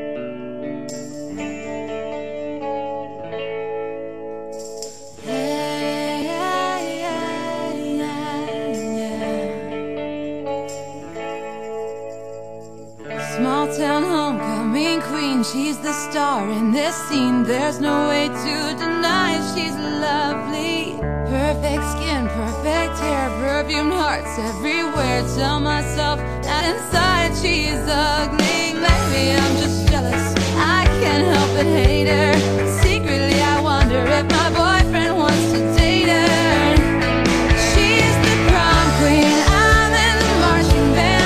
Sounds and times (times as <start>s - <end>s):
Music: 0.0s - 41.2s.